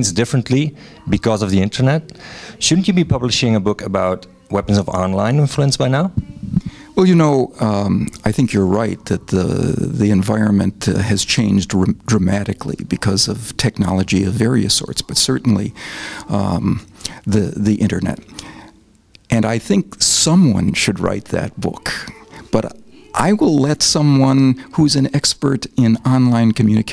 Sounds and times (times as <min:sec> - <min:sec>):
Speech: 0:00.0 - 0:18.3, 0:19.3 - 0:26.9.